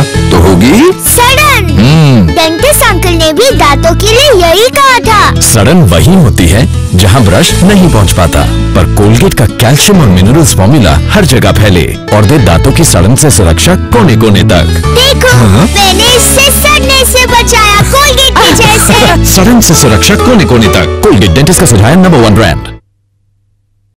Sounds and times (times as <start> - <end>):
Music: 0.0 - 22.8
Speech: 18.4 - 22.7.